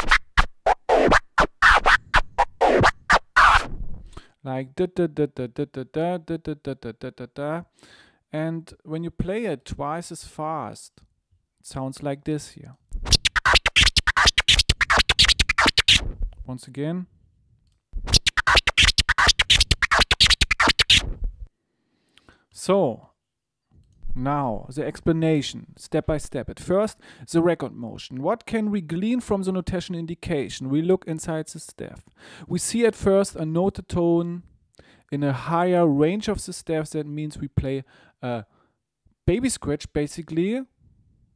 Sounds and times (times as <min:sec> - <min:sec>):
Scratching (performance technique): 0:00.0 - 0:04.2, 0:12.9 - 0:16.5, 0:18.0 - 0:21.5
Speech: 0:04.4 - 0:07.7, 0:08.3 - 0:12.8, 0:16.4 - 0:17.1, 0:22.5 - 0:23.2, 0:24.1 - 0:34.5, 0:35.1 - 0:38.5, 0:39.2 - 0:40.8.